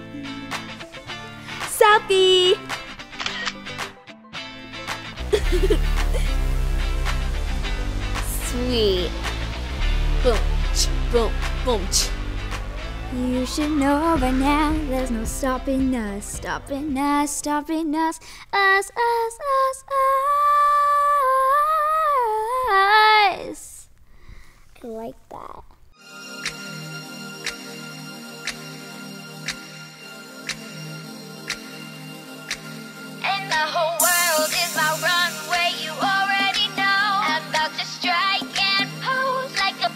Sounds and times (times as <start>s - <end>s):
Music: 0.0s - 19.6s, 25.9s - 39.9s.